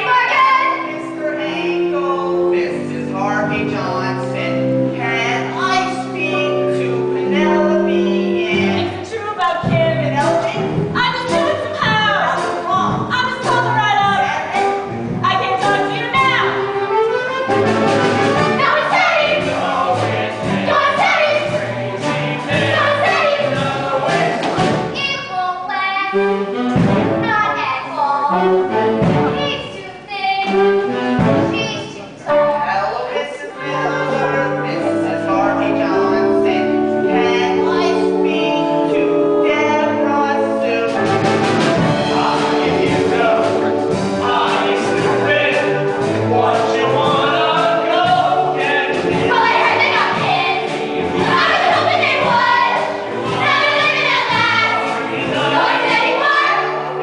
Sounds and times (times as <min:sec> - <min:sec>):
Music: 0:00.0 - 0:57.0.